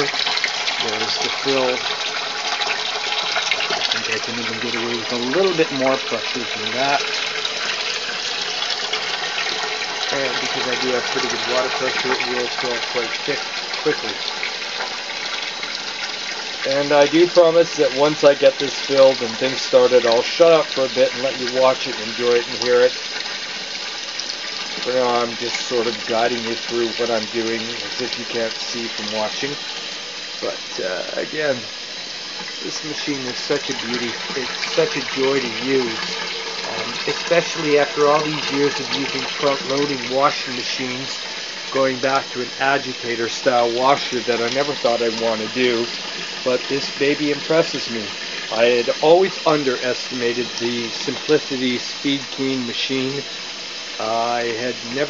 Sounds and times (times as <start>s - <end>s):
Water: 0.0s - 55.1s
Speech: 0.8s - 1.9s, 3.9s - 7.1s, 10.1s - 14.2s, 16.6s - 23.0s, 24.8s - 29.6s, 30.4s - 31.7s, 32.6s - 36.0s, 36.6s - 53.3s, 54.0s - 55.1s.